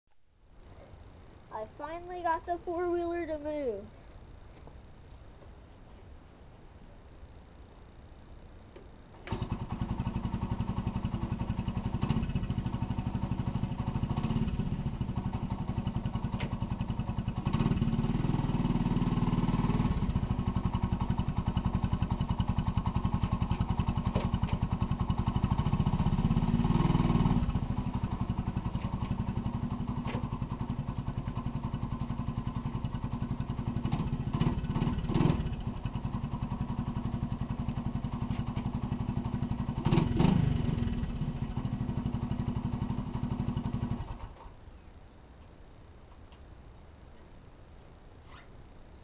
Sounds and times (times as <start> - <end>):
Outside, rural or natural: 0.0 - 49.0
Speech: 1.5 - 4.0
Vehicle: 9.2 - 44.9.